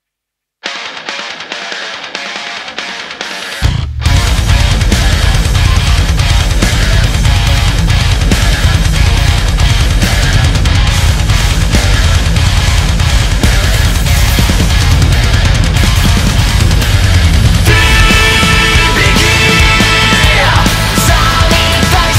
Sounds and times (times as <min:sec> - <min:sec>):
Music: 0:00.6 - 0:22.1.